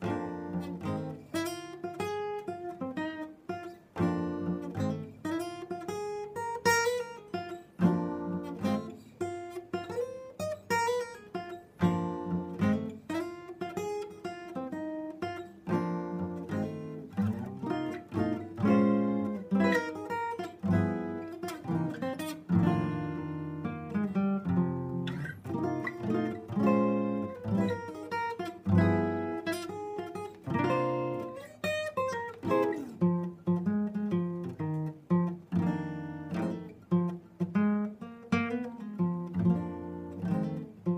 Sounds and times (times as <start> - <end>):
Acoustic guitar: 0.0 - 40.9.